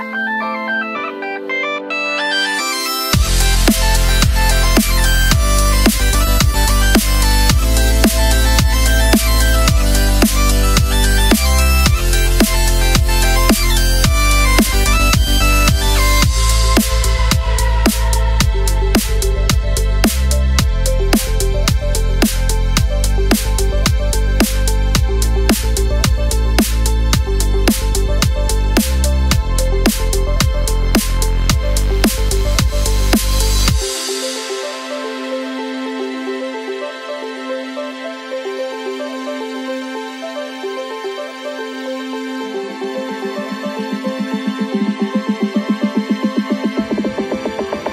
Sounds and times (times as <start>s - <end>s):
Background music: 0.0s - 47.9s.